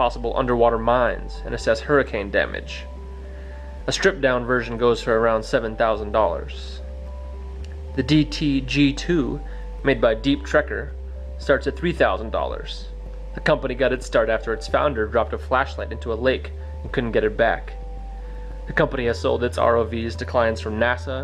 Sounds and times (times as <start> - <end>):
Speech: 0.0 - 2.9, 3.9 - 6.8, 8.0 - 17.8, 18.7 - 21.2
Music: 0.0 - 21.2.